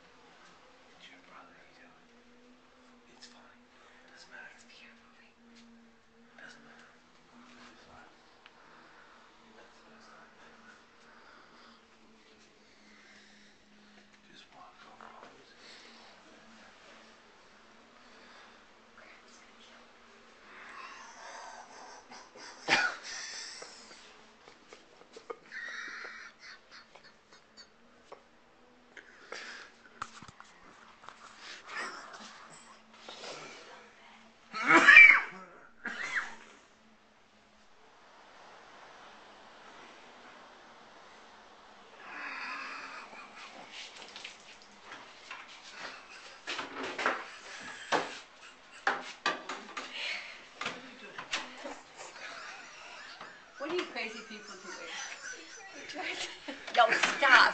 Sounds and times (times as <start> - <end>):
Inside, small room: 0.0 - 57.5
Cough: 22.6 - 23.0, 34.6 - 35.4.